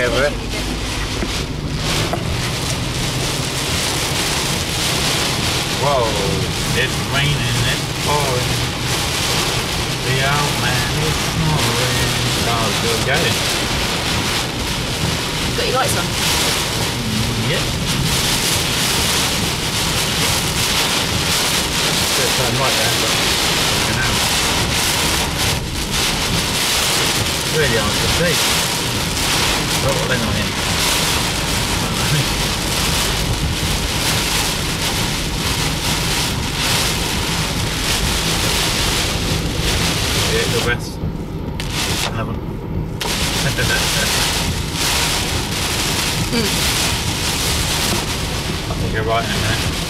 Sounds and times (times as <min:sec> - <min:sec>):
Speech: 0:00.0 - 0:00.7, 0:05.8 - 0:08.5, 0:10.0 - 0:13.4, 0:15.6 - 0:16.2, 0:17.0 - 0:17.8, 0:22.2 - 0:23.2, 0:23.9 - 0:24.2, 0:27.5 - 0:28.4, 0:29.8 - 0:30.5, 0:40.3 - 0:41.0, 0:42.0 - 0:42.4, 0:48.7 - 0:49.7
Raindrop: 0:00.0 - 0:49.8.